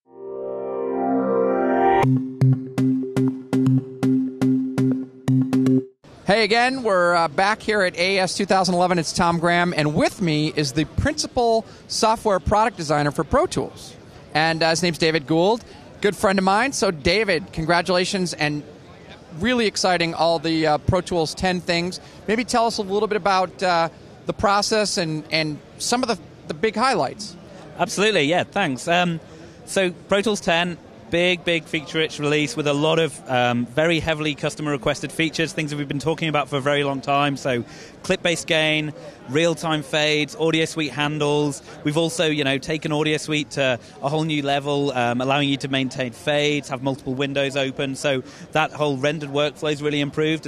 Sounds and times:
Speech: 0:06.3 - 0:50.4.

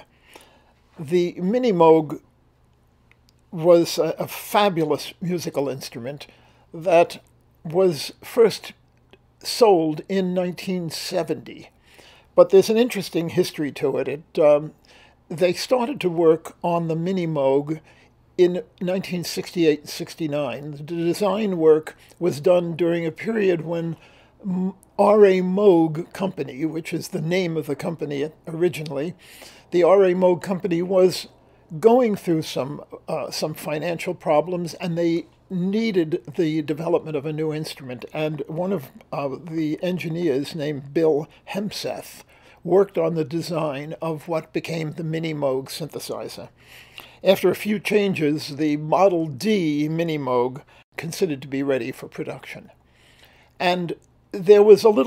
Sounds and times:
Speech: 0:01.0 - 0:02.2, 0:03.5 - 0:08.8, 0:09.4 - 0:11.7, 0:12.4 - 0:14.7, 0:15.3 - 0:17.8, 0:18.4 - 0:46.5, 0:47.2 - 0:52.7, 0:53.6 - 0:55.0.

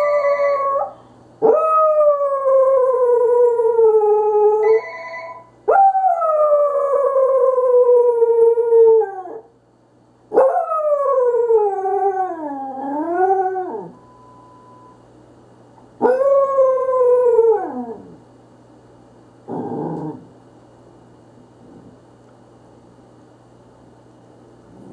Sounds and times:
Howl: 0:00.0 - 0:09.5, 0:10.4 - 0:14.0, 0:16.0 - 0:18.2.

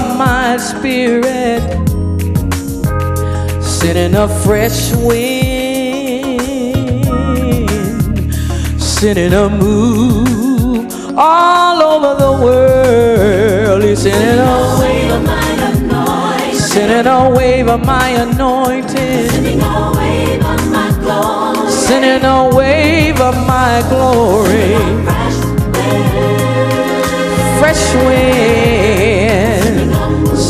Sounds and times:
Music: 0:00.0 - 0:30.5.

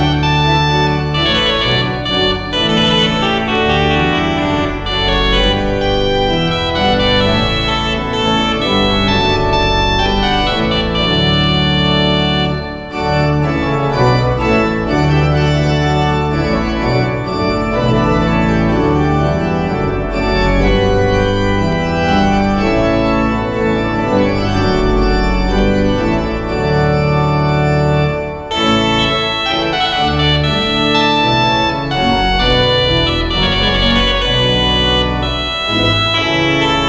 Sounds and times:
Musical instrument: 0:00.0 - 0:36.8.

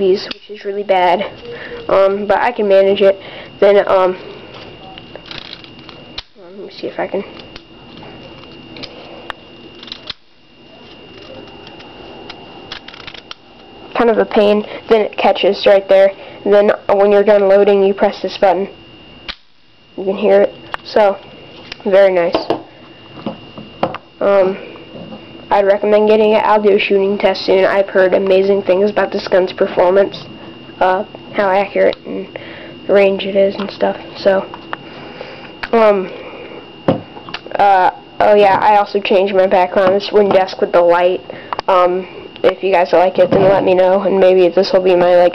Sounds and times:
Speech: 0:06.4 - 0:07.3, 0:14.0 - 0:18.7, 0:20.0 - 0:21.2, 0:21.8 - 0:22.5, 0:25.5 - 0:30.2, 0:30.8 - 0:32.3, 0:32.9 - 0:34.5, 0:35.7 - 0:36.1, 0:37.5 - 0:45.3.

